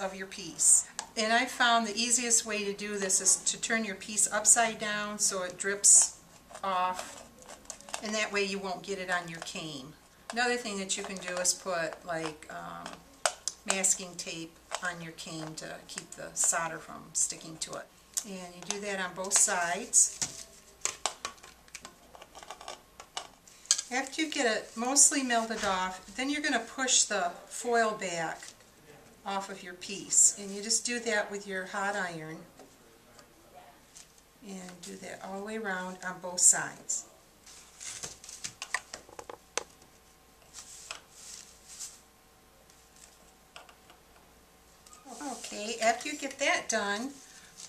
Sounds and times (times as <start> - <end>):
Speech: 8.0 - 13.0, 23.9 - 37.2, 45.0 - 47.2.